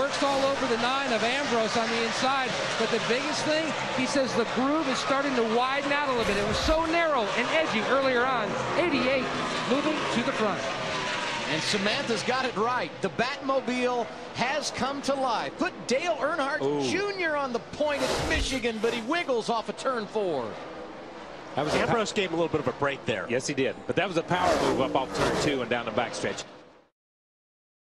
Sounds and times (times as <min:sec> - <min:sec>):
Car passing by: 0:00.0 - 0:16.5, 0:17.2 - 0:23.3, 0:24.0 - 0:26.6.